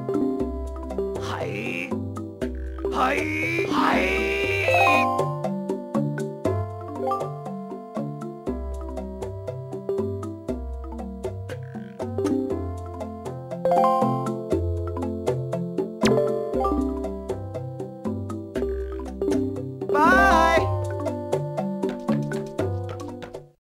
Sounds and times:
Music: 0.0 - 23.6
Speech: 1.2 - 2.0, 2.9 - 5.1, 20.0 - 20.8.

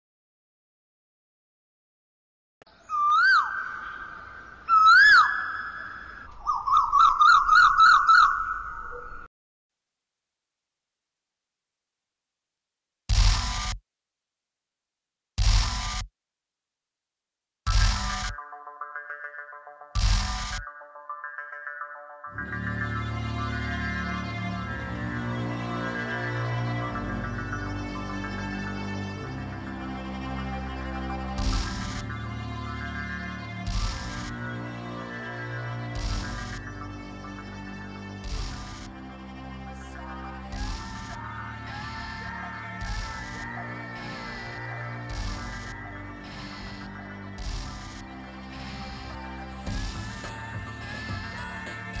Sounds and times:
Outside, rural or natural: 2.6 - 9.3, 13.1 - 13.8, 15.4 - 16.1, 17.6 - 52.0.

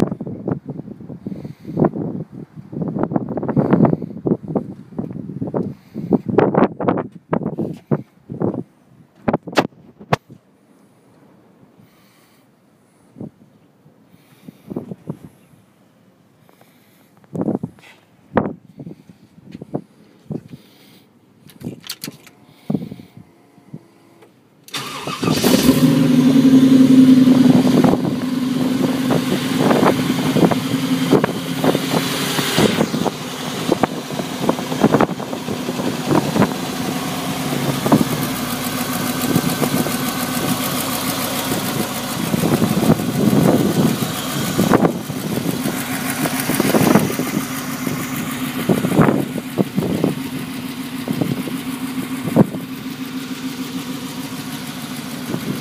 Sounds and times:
Truck: 0.0 - 15.6, 16.4 - 55.6.

